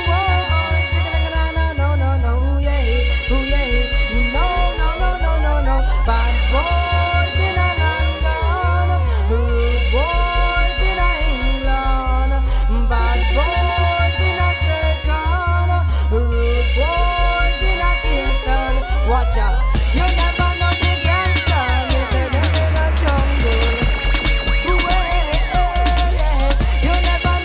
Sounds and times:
Music: 0:00.0 - 0:27.4.

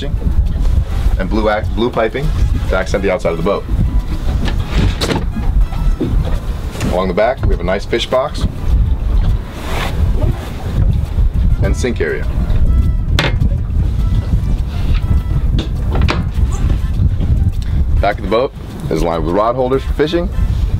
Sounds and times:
Boat, Water vehicle: 0:00.0 - 0:20.7
Music: 0:00.0 - 0:20.7
Speech: 0:01.2 - 0:03.6, 0:06.8 - 0:08.5, 0:11.6 - 0:12.3, 0:18.0 - 0:20.4.

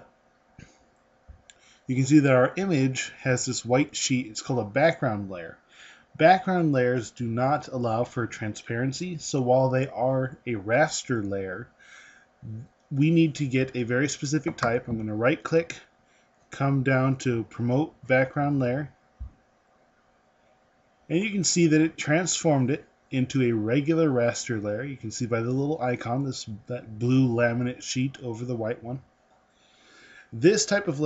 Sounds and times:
Speech: 0:01.9 - 0:05.6, 0:06.2 - 0:11.7, 0:12.5 - 0:15.8, 0:16.6 - 0:18.9, 0:21.1 - 0:29.0, 0:30.4 - 0:31.0.

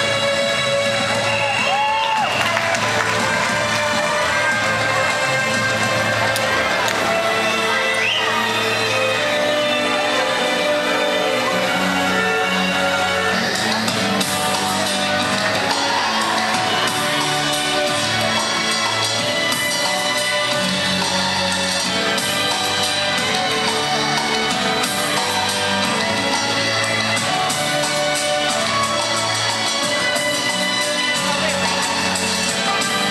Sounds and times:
Music: 0:00.0 - 0:33.1.

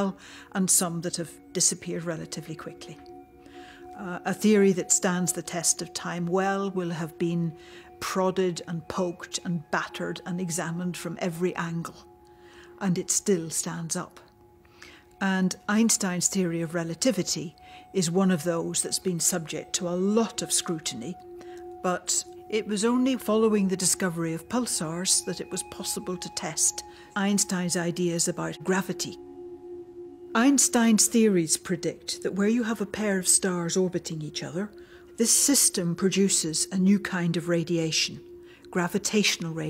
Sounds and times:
Speech: 0:00.0 - 0:03.1, 0:04.0 - 0:12.1, 0:12.8 - 0:14.2, 0:15.2 - 0:21.2, 0:21.8 - 0:29.2, 0:30.4 - 0:39.7
Music: 0:00.0 - 0:39.7.

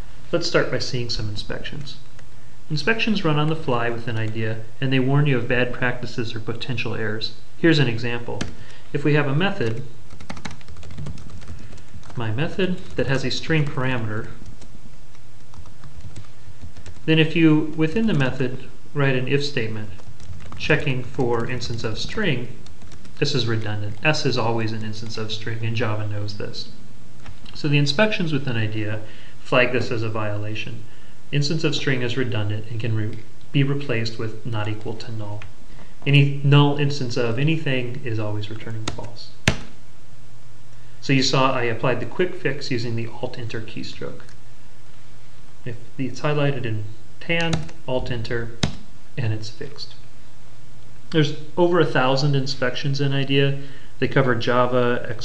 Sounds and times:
Speech: 0:00.3 - 0:02.1, 0:02.7 - 0:09.9, 0:12.2 - 0:14.4, 0:17.1 - 0:20.0, 0:20.6 - 0:22.6, 0:23.2 - 0:26.8, 0:27.5 - 0:39.4, 0:41.0 - 0:44.3, 0:45.6 - 0:48.6, 0:49.2 - 0:50.0, 0:51.2 - 0:55.2.

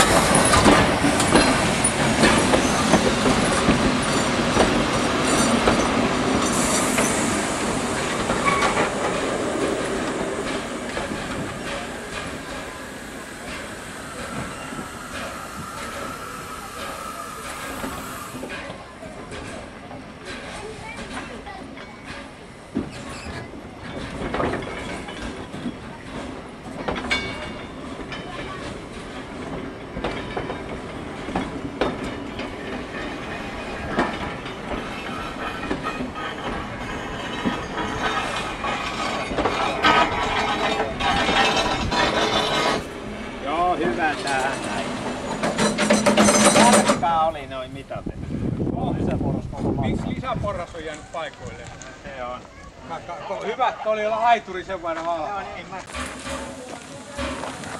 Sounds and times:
Clickety-clack: 0:00.0 - 0:07.3, 0:18.5 - 0:42.9, 0:43.8 - 0:47.1
Railroad car, train wagon: 0:00.0 - 0:57.7
Train: 0:00.0 - 0:57.7.

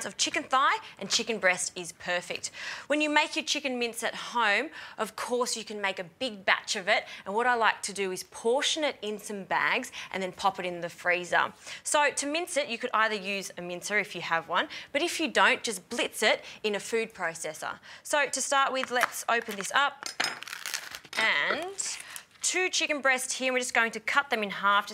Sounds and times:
Speech: 0:00.0 - 0:20.0, 0:21.2 - 0:24.9.

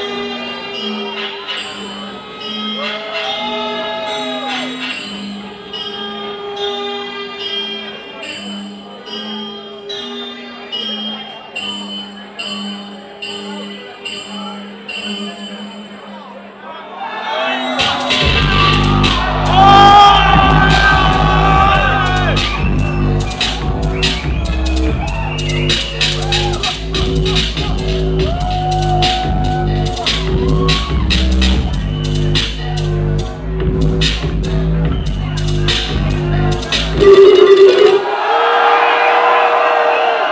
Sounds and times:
Music: 0:00.0 - 0:40.3
Speech: 0:10.4 - 0:18.7.

